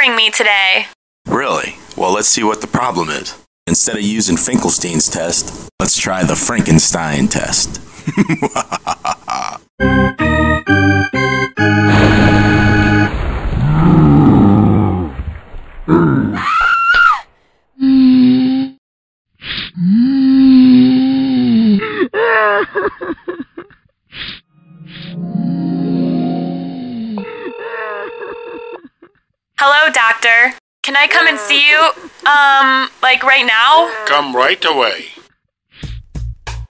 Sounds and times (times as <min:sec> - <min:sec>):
Speech: 0:00.0 - 0:07.8, 0:29.6 - 0:35.3
Music: 0:09.8 - 0:13.1, 0:24.6 - 0:26.9, 0:35.8 - 0:36.6
Groan: 0:13.6 - 0:15.1, 0:17.8 - 0:18.8, 0:19.6 - 0:22.6.